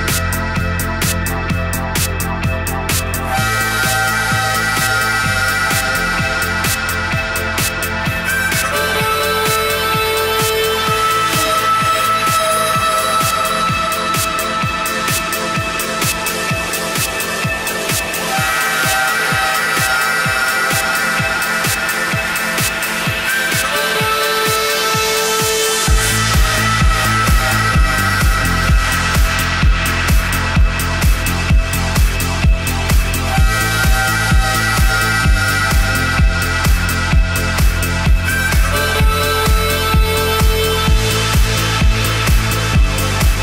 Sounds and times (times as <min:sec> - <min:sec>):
Music: 0:00.0 - 0:43.4.